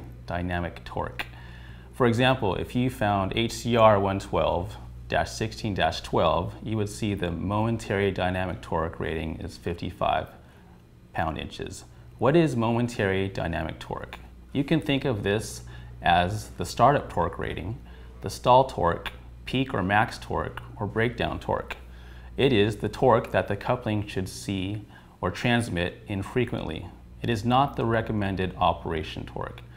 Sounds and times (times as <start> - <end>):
Speech: 0.0 - 10.4, 11.1 - 29.7.